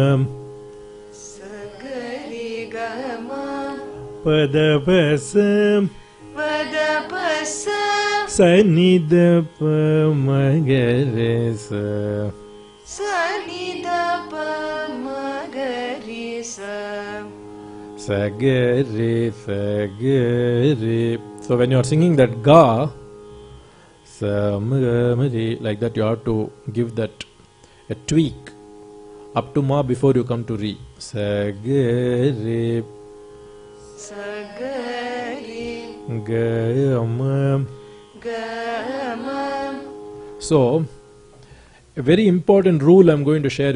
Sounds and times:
Carnatic music: 0.0s - 43.7s.

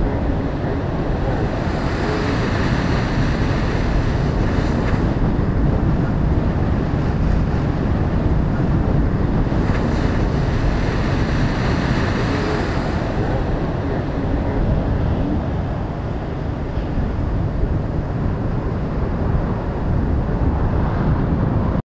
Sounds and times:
Water: 0.0s - 21.8s.

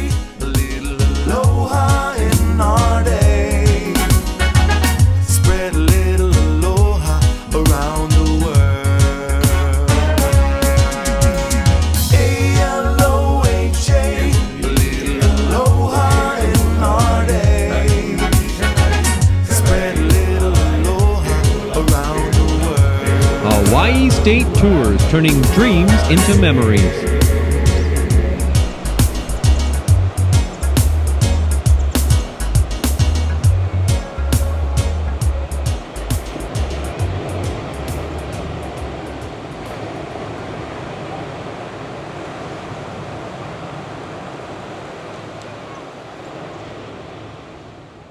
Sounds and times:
Waves, surf: 0.0s - 5.7s, 7.0s - 48.1s
Wind: 27.0s - 48.1s.

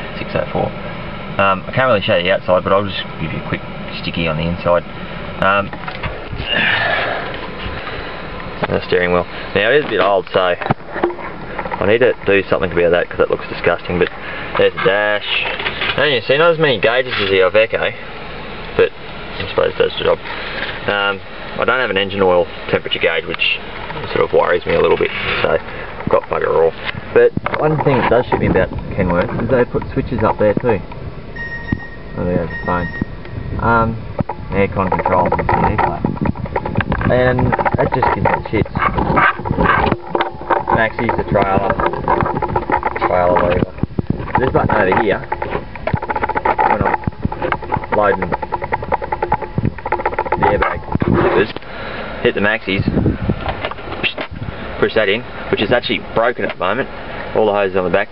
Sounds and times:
Speech: 0.2s - 0.7s, 1.4s - 4.8s, 5.4s - 5.8s, 8.6s - 10.7s, 11.8s - 18.0s, 18.8s - 20.2s, 20.8s - 30.8s, 32.2s - 32.9s, 33.6s - 36.1s, 37.0s - 38.9s, 40.7s - 41.8s, 43.0s - 43.8s, 44.4s - 45.3s, 46.6s - 47.0s, 47.9s - 48.4s, 50.4s - 51.6s, 52.2s - 53.0s, 54.0s - 58.1s.

